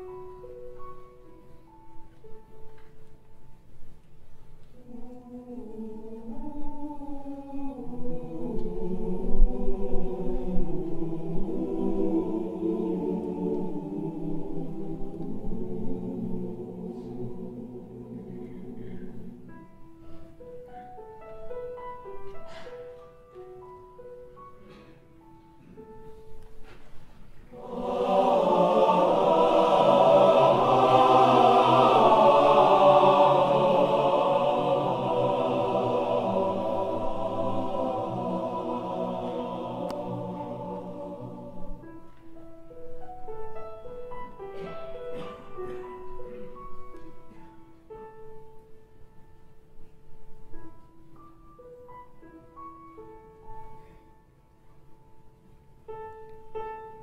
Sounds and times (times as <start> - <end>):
Choir: 4.6 - 25.0, 27.4 - 54.3.